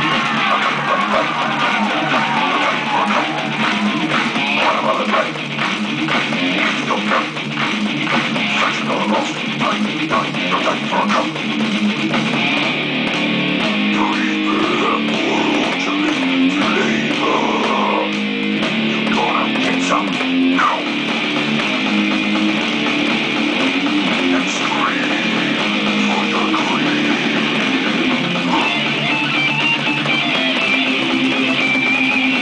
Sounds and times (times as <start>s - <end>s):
Electric guitar: 0.0s - 32.4s.